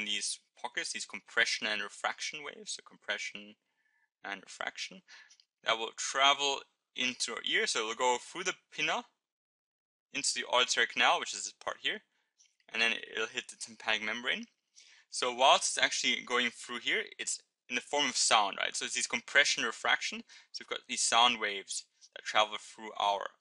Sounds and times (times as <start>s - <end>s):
Speech: 0.0s - 3.6s, 4.3s - 9.2s, 10.2s - 12.1s, 12.7s - 23.4s.